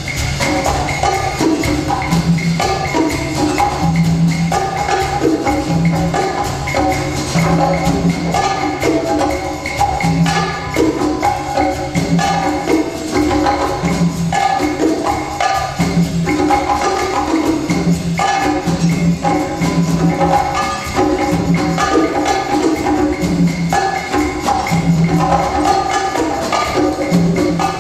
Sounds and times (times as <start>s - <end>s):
Wood block: 0.0s - 27.8s.